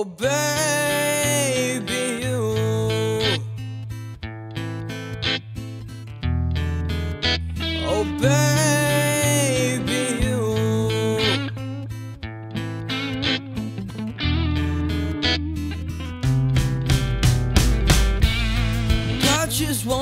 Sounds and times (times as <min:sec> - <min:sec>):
Electronic tuner: 0:00.0 - 0:20.0
Music: 0:00.2 - 0:20.0.